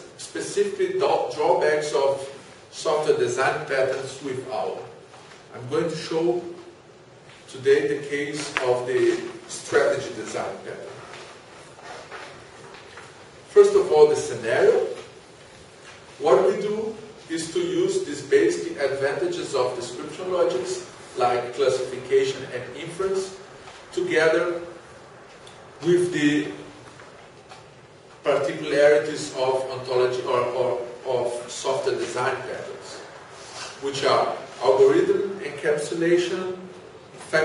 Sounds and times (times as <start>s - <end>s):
Speech: 0.0s - 6.8s, 7.5s - 11.1s, 13.5s - 15.2s, 16.2s - 24.8s, 25.8s - 26.8s, 28.2s - 33.1s, 33.8s - 37.4s.